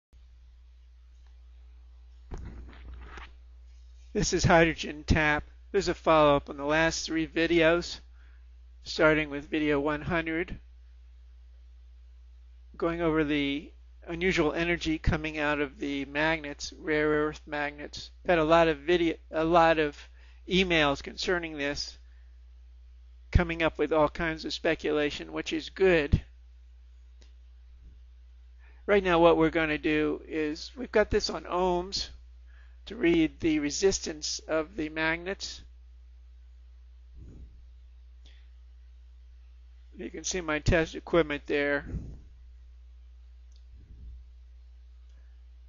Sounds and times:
Speech: 4.2 - 8.1, 8.8 - 10.6, 12.8 - 22.0, 23.3 - 26.3, 28.9 - 32.2, 32.9 - 35.7, 40.0 - 42.1.

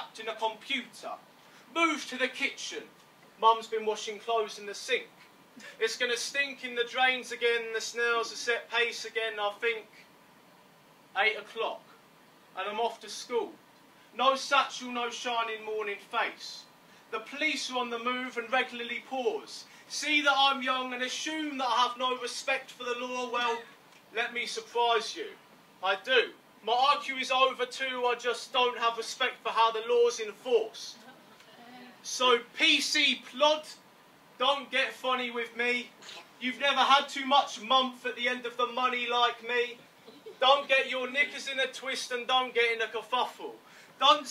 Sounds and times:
Speech: 0.0 - 5.1, 5.7 - 10.0, 11.2 - 11.9, 12.6 - 13.6, 14.2 - 33.8, 34.4 - 44.3.

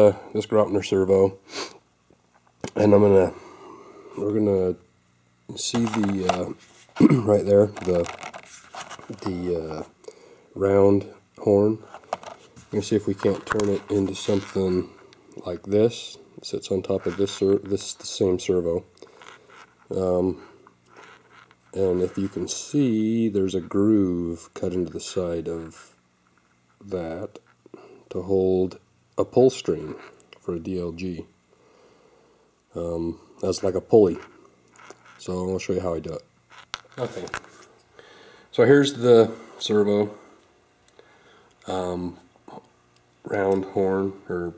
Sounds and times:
Speech: 0.0 - 1.4, 2.7 - 3.4, 4.2 - 4.9, 5.5 - 8.2, 9.1 - 9.9, 10.6 - 11.9, 12.7 - 18.9, 19.9 - 20.5, 21.7 - 26.0, 26.8 - 27.4, 28.1 - 31.3, 32.7 - 34.3, 35.2 - 36.3, 37.0 - 37.4, 38.5 - 40.2, 41.6 - 44.5.

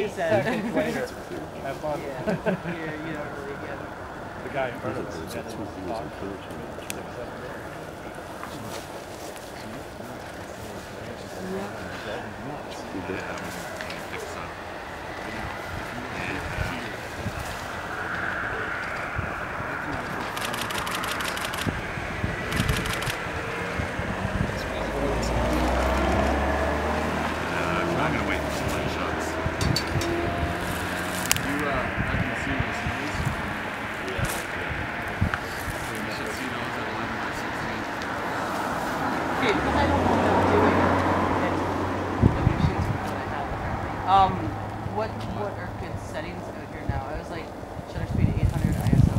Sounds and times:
Speech: 0.0 - 8.9, 19.6 - 20.8, 27.5 - 29.4, 31.4 - 34.7, 35.3 - 37.9, 39.4 - 49.1.

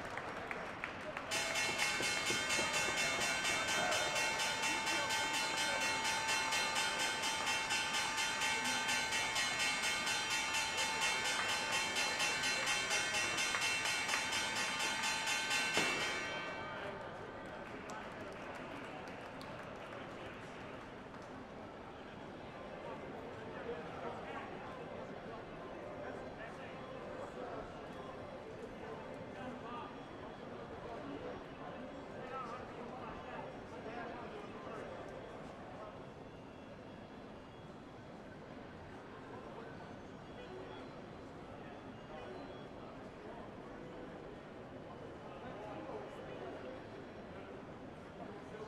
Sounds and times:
Speech: 0.0 - 48.6.

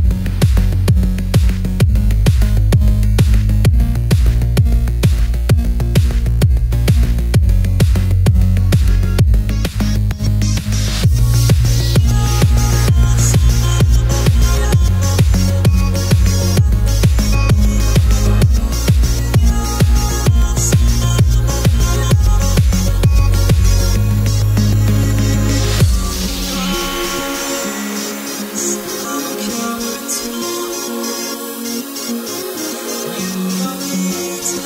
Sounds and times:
Techno: 0.0 - 34.6.

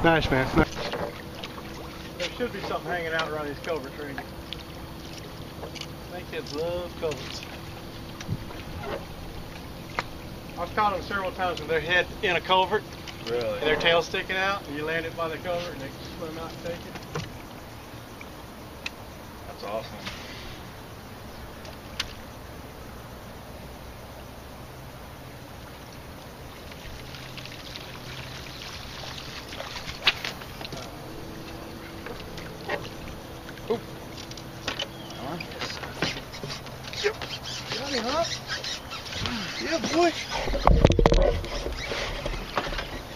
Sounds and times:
Outside, rural or natural: 0.0 - 43.1.

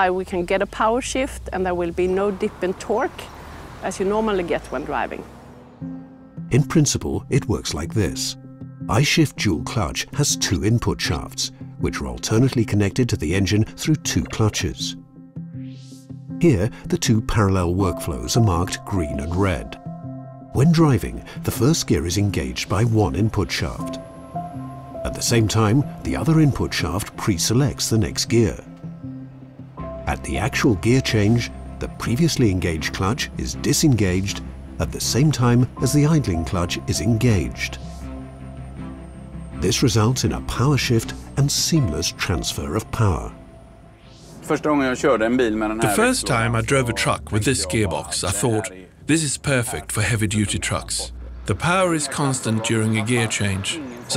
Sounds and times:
Music: 0.0 - 3.2, 3.9 - 54.1
Speech: 0.0 - 3.3, 3.9 - 5.2, 6.5 - 15.0, 16.4 - 19.8, 20.6 - 24.0, 25.1 - 28.6, 30.1 - 37.8, 39.6 - 43.4, 44.5 - 54.1.

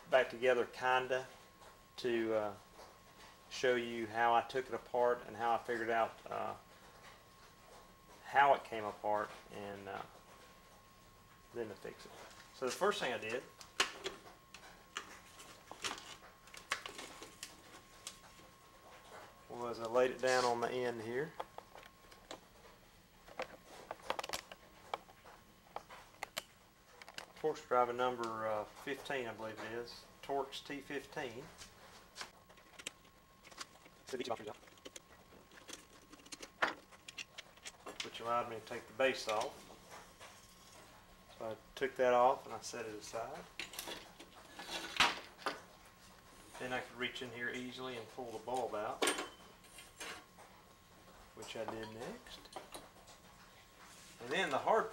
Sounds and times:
Speech: 0.1 - 1.3, 2.0 - 2.6, 3.5 - 6.6, 8.2 - 10.1, 11.5 - 13.5, 19.5 - 21.4, 27.4 - 31.5, 34.1 - 34.6, 38.0 - 39.6, 41.4 - 43.5, 46.6 - 49.0, 51.4 - 52.4, 54.2 - 54.9.

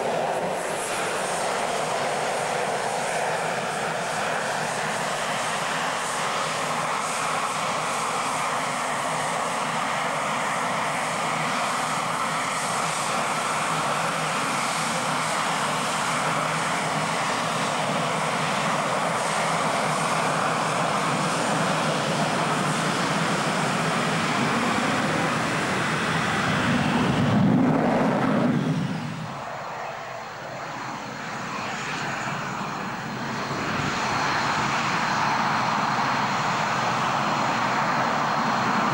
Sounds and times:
Aircraft engine: 0.0 - 38.9
Fixed-wing aircraft, airplane: 0.0 - 38.9
Outside, rural or natural: 0.0 - 38.9.

